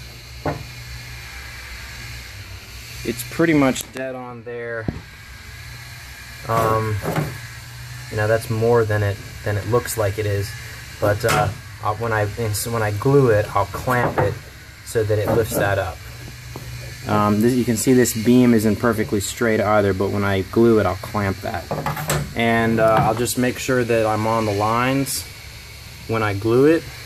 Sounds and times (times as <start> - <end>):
Wood: 0.4 - 0.8, 6.5 - 7.4, 13.8 - 14.5, 15.1 - 15.8, 21.7 - 23.3
Speech: 3.0 - 4.9, 6.4 - 7.1, 8.1 - 16.0, 17.0 - 21.7, 22.4 - 25.3, 26.1 - 26.9.